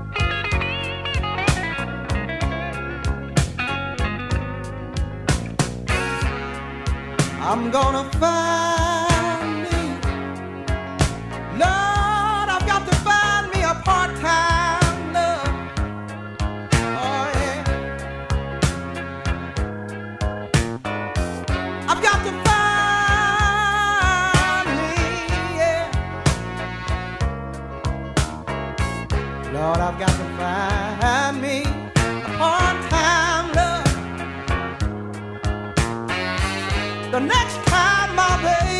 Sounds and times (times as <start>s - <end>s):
Soul music: 0.0s - 38.7s.